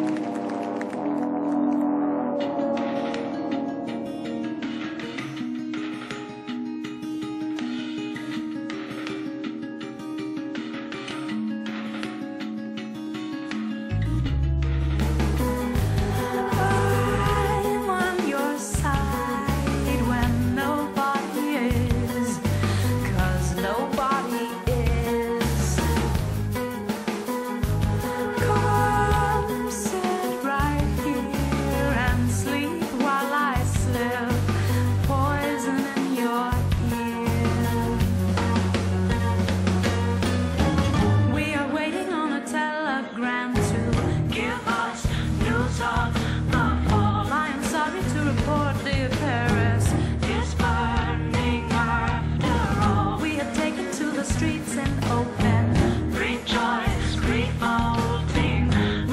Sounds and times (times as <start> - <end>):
Singing: 15.8 - 26.1, 28.0 - 34.5, 41.4 - 59.1.